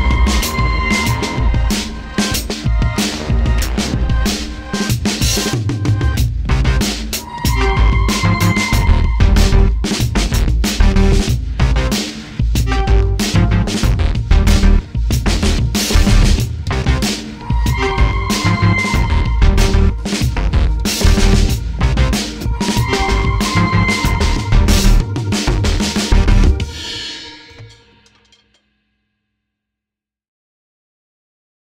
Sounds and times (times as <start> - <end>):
Bass drum: 0.0 - 26.8
Drum kit: 0.0 - 28.6.